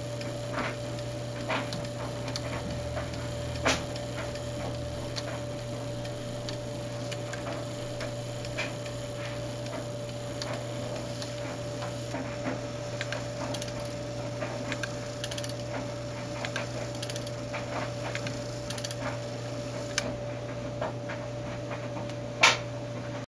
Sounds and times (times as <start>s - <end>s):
Tick-tock: 0.2s - 19.2s.